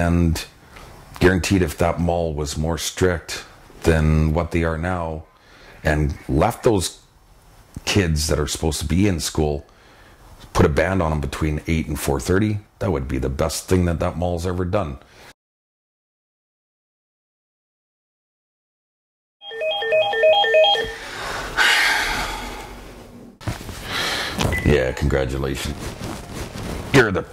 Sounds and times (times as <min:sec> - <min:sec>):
Speech: 0:00.0 - 0:00.5, 0:01.2 - 0:05.2, 0:05.8 - 0:07.0, 0:07.8 - 0:09.7, 0:10.5 - 0:15.0, 0:24.6 - 0:25.8, 0:26.9 - 0:27.3.